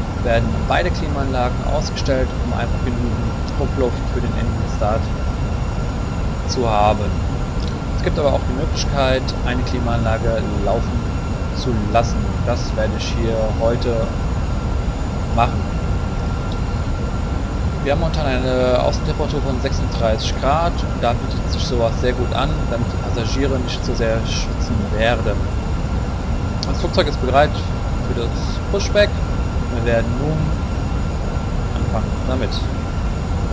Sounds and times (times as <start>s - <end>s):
Heavy engine (low frequency): 0.0s - 33.5s
Speech: 0.2s - 5.1s, 6.5s - 11.0s, 11.6s - 14.1s, 15.4s - 15.7s, 17.8s - 25.4s, 26.6s - 29.2s, 29.8s - 30.6s, 31.8s - 32.7s.